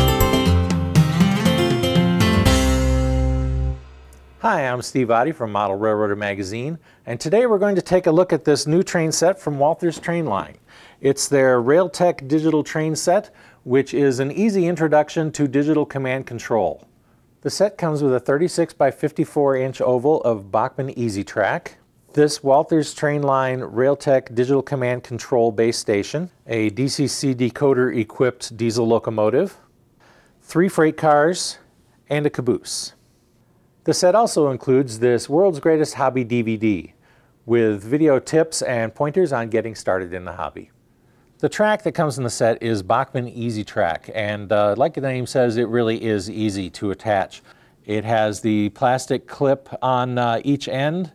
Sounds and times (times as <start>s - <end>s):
Speech: 4.4s - 29.7s, 30.4s - 33.0s, 33.8s - 40.8s, 41.4s - 51.1s.